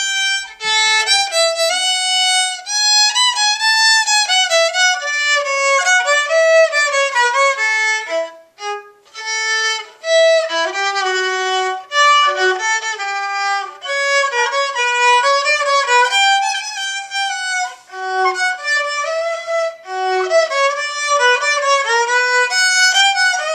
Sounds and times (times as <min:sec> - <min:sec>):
Violin, fiddle: 0:00.0 - 0:23.5.